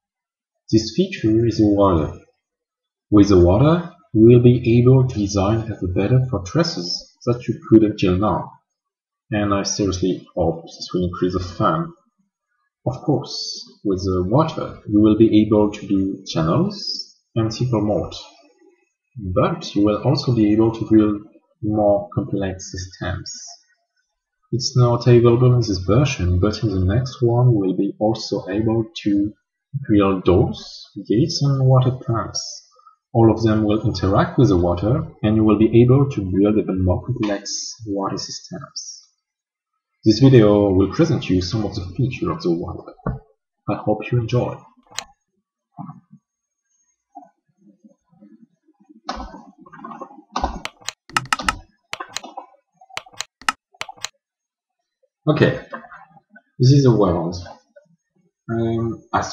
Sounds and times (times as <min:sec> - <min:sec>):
Speech: 0:00.7 - 0:02.2, 0:03.1 - 0:08.6, 0:09.3 - 0:12.0, 0:12.9 - 0:18.4, 0:19.2 - 0:23.6, 0:24.6 - 0:39.1, 0:40.0 - 0:44.7, 0:55.3 - 0:57.6, 0:58.5 - 0:59.3.